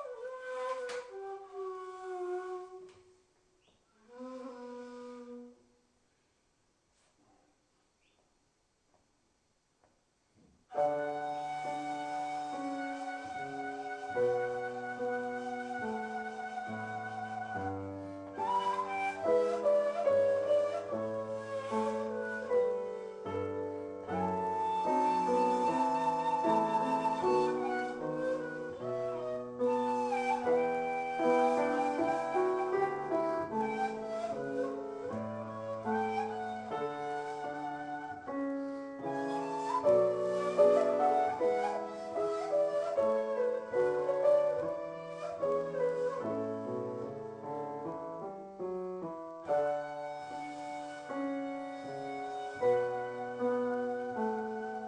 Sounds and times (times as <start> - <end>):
Music: 0.0 - 5.9, 10.7 - 54.8.